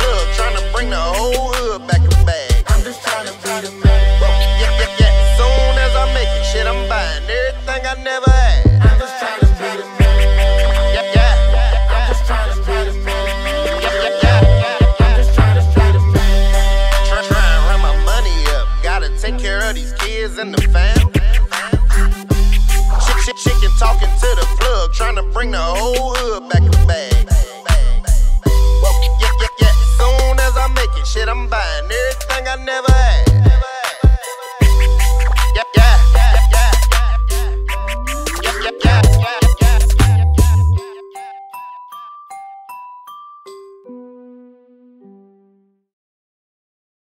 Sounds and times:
Outside, urban or manmade: 0:00.0 - 0:41.4
Music: 0:00.0 - 0:45.9.

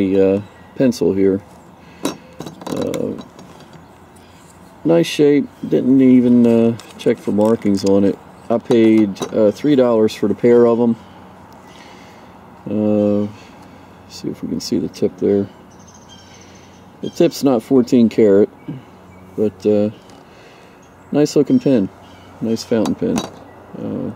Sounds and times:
Speech: 0:00.0 - 0:01.4, 0:02.7 - 0:03.2, 0:04.8 - 0:11.0, 0:12.6 - 0:13.4, 0:14.1 - 0:15.5, 0:17.0 - 0:18.8, 0:19.4 - 0:20.0, 0:21.1 - 0:24.1
Outside, rural or natural: 0:00.0 - 0:24.1.

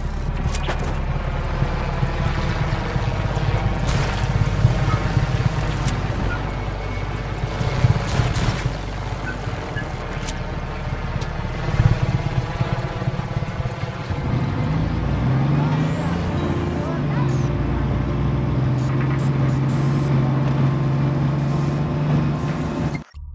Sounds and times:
Vehicle: 0:00.0 - 0:23.3.

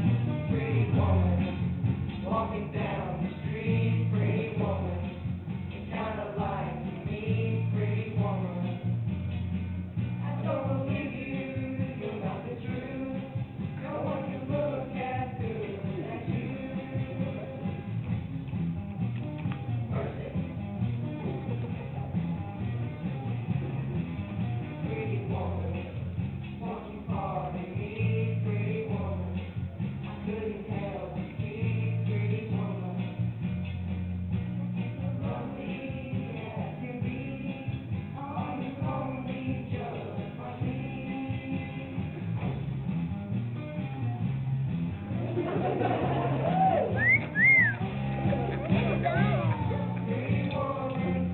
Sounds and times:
Male singing: 0:00.0 - 0:01.6, 0:02.2 - 0:05.2, 0:05.9 - 0:08.8, 0:10.2 - 0:17.8, 0:19.9 - 0:20.4, 0:24.8 - 0:26.0, 0:26.6 - 0:29.4, 0:30.0 - 0:33.2, 0:35.0 - 0:42.5, 0:45.6 - 0:51.3
Music: 0:00.0 - 0:51.3.

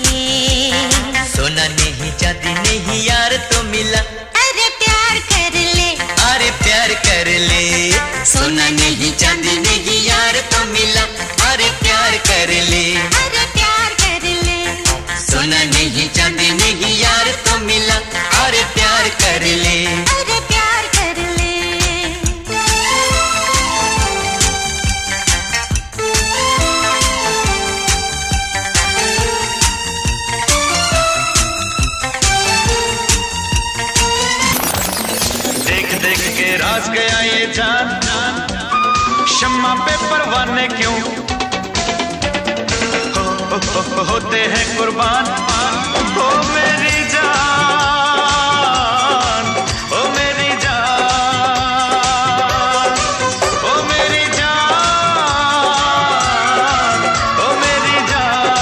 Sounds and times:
Music of Bollywood: 0:00.0 - 0:58.6
Disco: 0:34.3 - 0:36.9.

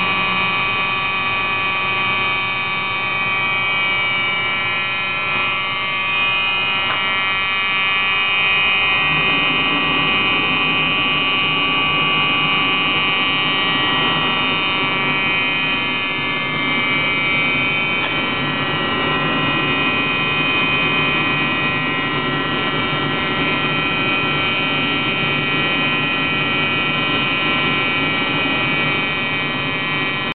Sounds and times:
Buzzer: 0:00.0 - 0:30.3.

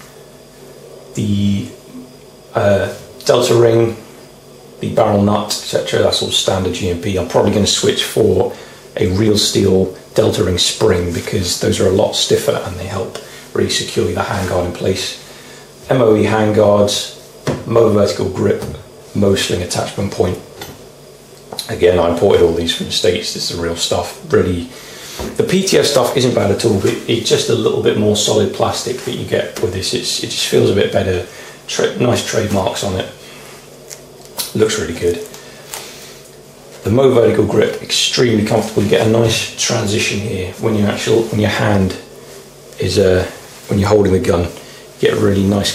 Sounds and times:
Inside, small room: 0:00.0 - 0:45.7
Speech: 0:01.2 - 0:04.1, 0:04.8 - 0:20.7, 0:21.6 - 0:33.2, 0:34.4 - 0:35.4, 0:36.8 - 0:42.2, 0:42.8 - 0:45.7.

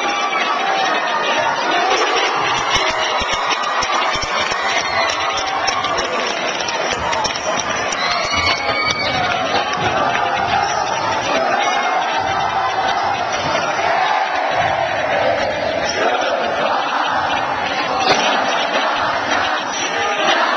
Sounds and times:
Speech: 0:00.0 - 0:20.5.

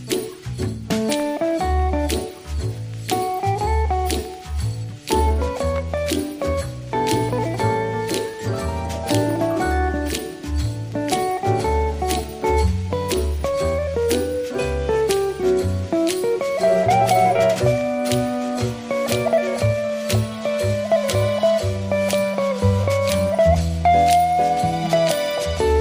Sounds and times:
Music: 0:00.0 - 0:25.8.

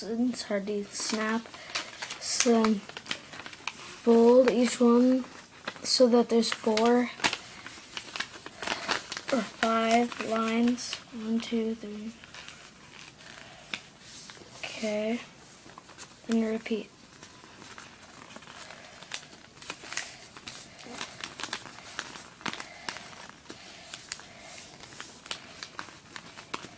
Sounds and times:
Speech: 0:00.0 - 0:01.5, 0:02.2 - 0:02.8, 0:04.0 - 0:07.2, 0:09.3 - 0:12.2, 0:14.6 - 0:15.3, 0:16.3 - 0:16.9.

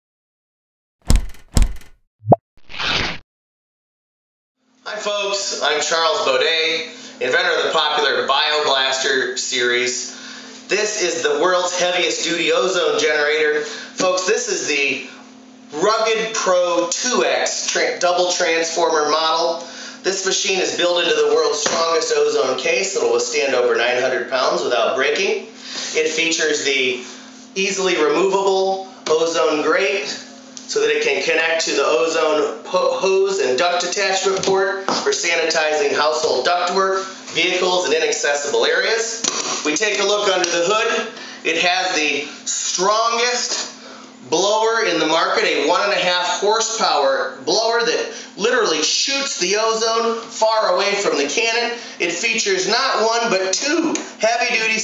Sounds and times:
Sound effect: 0:01.1 - 0:03.2.

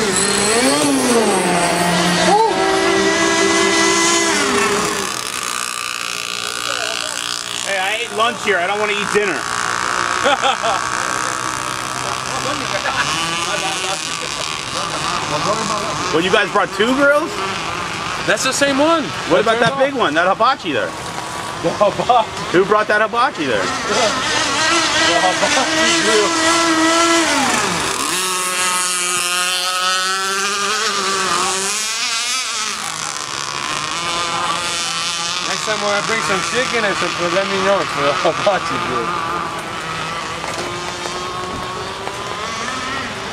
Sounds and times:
Outside, rural or natural: 0:00.0 - 0:43.3.

